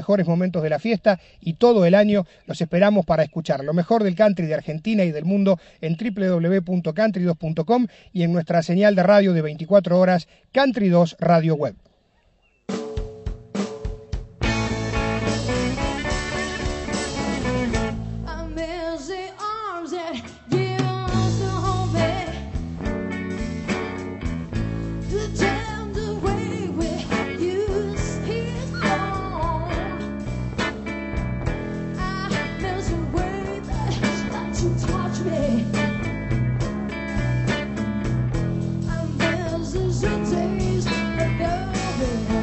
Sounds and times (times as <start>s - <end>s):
Country: 14.4s - 18.9s, 20.2s - 42.4s.